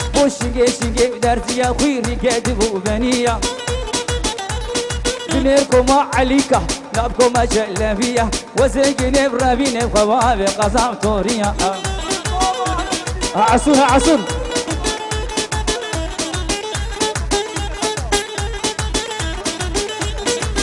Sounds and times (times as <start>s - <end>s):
Music: 0.0s - 20.6s.